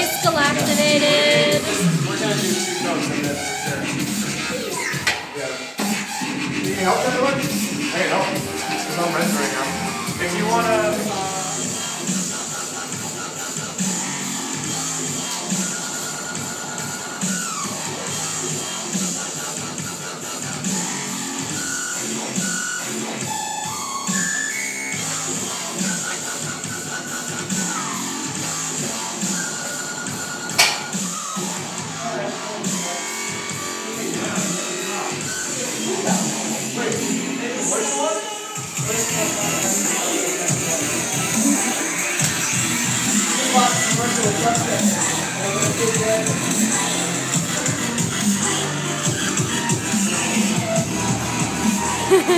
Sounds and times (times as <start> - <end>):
Speech: 0.0 - 3.9, 6.7 - 11.6, 32.0 - 33.1, 34.0 - 41.0, 43.3 - 46.4
Dubstep: 0.0 - 52.3.